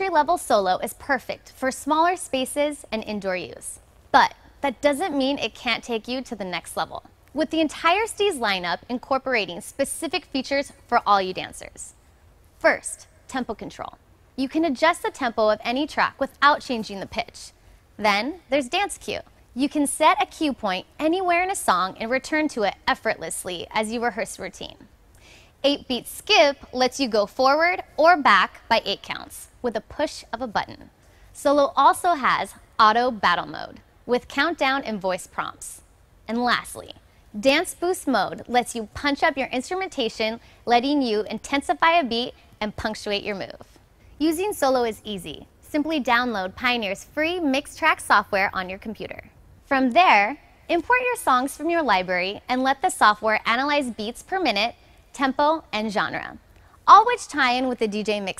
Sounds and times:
Speech: 0:00.0 - 0:11.9, 0:12.6 - 0:24.9, 0:25.6 - 0:43.6, 0:44.2 - 0:58.3.

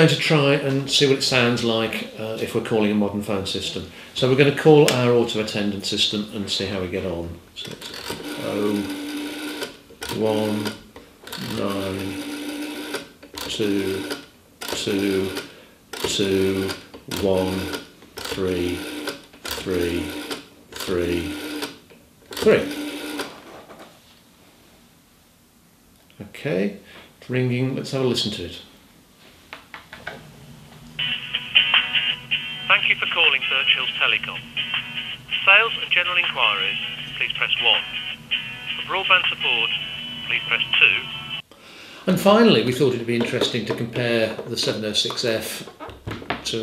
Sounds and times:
Speech: 0:00.0 - 0:07.8, 0:08.4 - 0:09.0, 0:10.1 - 0:10.8, 0:11.4 - 0:12.2, 0:13.5 - 0:14.1, 0:14.8 - 0:15.4, 0:16.1 - 0:17.7, 0:18.4 - 0:18.8, 0:19.6 - 0:20.2, 0:20.8 - 0:21.4, 0:22.4 - 0:22.8, 0:26.1 - 0:28.7, 0:32.7 - 0:34.5, 0:35.3 - 0:38.1, 0:38.7 - 0:41.2, 0:42.1 - 0:45.7
Telephone: 0:07.8 - 0:16.8, 0:17.5 - 0:21.8, 0:22.4 - 0:23.4, 0:31.0 - 0:41.4.

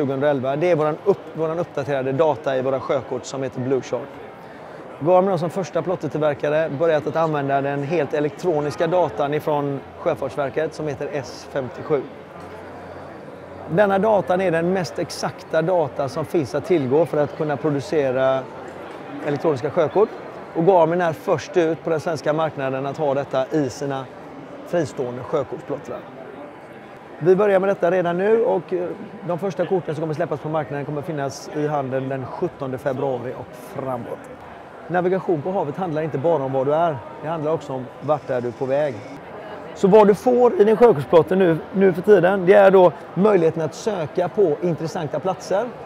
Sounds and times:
Speech: 0:00.0 - 0:04.2, 0:05.0 - 0:12.1, 0:13.7 - 0:18.5, 0:19.2 - 0:24.1, 0:24.7 - 0:26.0, 0:27.2 - 0:34.3, 0:34.9 - 0:45.8.

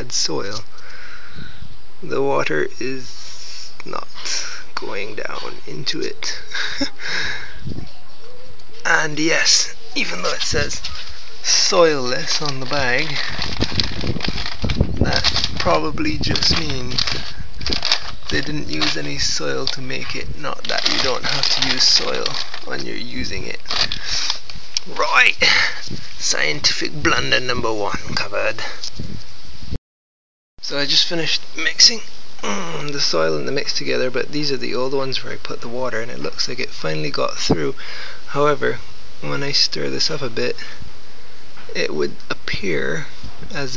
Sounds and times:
Speech: 0:00.0 - 0:00.7, 0:02.0 - 0:06.5, 0:07.7 - 0:13.4, 0:15.0 - 0:17.2, 0:18.3 - 0:28.8, 0:30.6 - 0:40.8, 0:41.7 - 0:43.7.

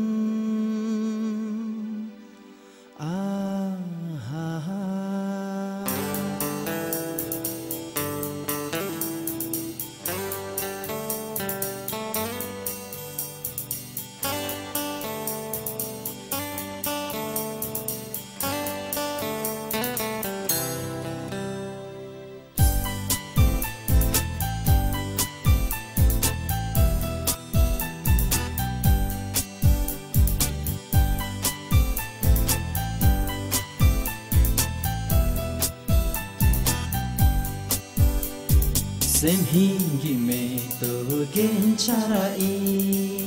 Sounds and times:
Tender music: 0:00.0 - 0:43.2.

